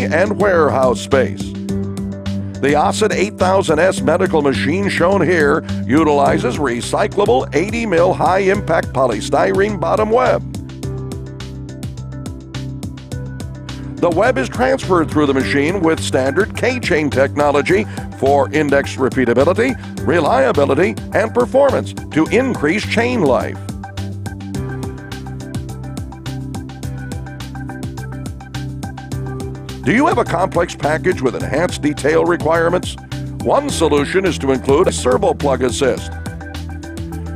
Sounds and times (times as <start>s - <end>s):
Speech: 0.0s - 1.5s, 2.6s - 10.4s, 14.0s - 23.6s, 29.9s - 36.1s
Music: 0.0s - 37.3s.